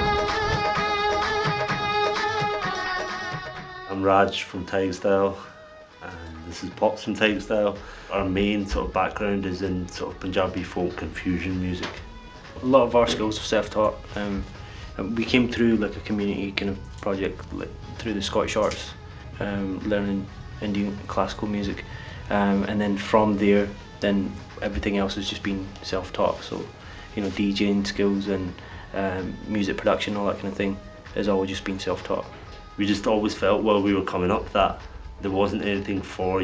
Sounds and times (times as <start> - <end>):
Music: 0.0 - 36.4
Speech: 3.9 - 12.0, 12.6 - 36.4.